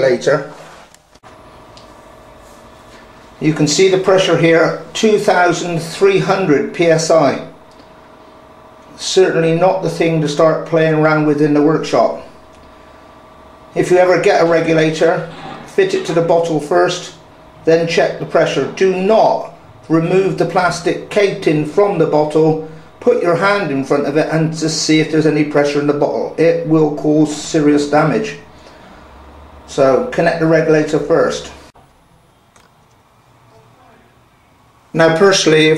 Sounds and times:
Speech: 0.0 - 0.6, 3.4 - 7.6, 8.9 - 12.4, 13.7 - 28.5, 29.7 - 31.7, 33.5 - 34.2, 34.9 - 35.7.

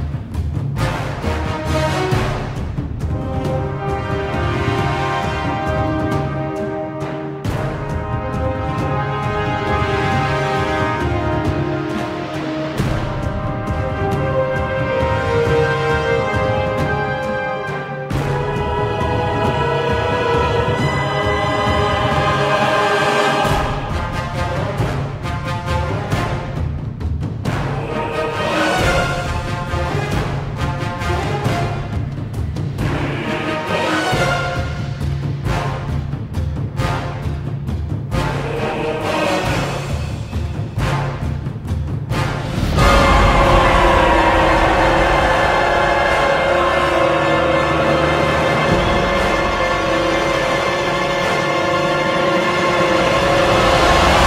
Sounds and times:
Theme music: 0.0 - 54.2.

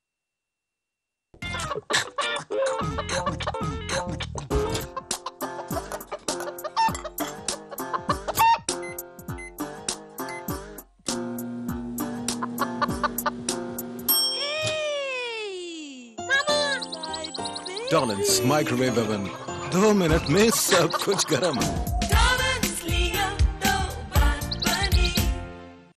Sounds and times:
Music: 1.4 - 14.1, 16.1 - 25.9
Speech: 14.5 - 16.9, 17.8 - 21.8.

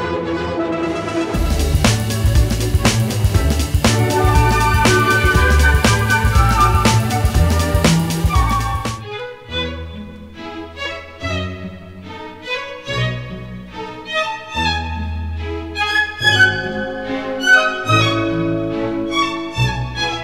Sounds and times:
Soundtrack music: 0.0 - 9.1.

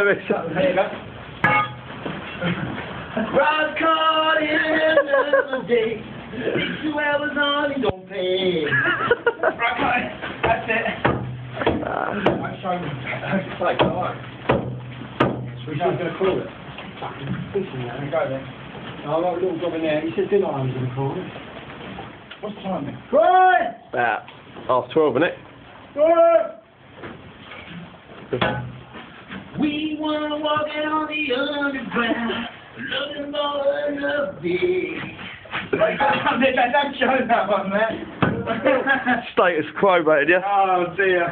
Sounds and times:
Male singing: 3.3 - 8.7, 29.6 - 37.2
Speech: 35.8 - 41.3.

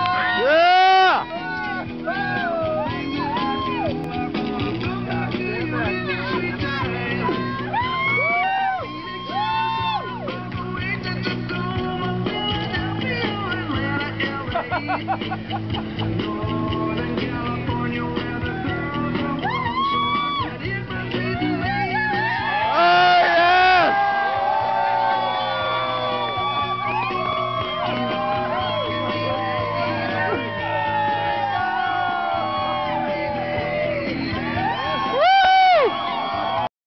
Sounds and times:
Music: 0.0 - 36.7.

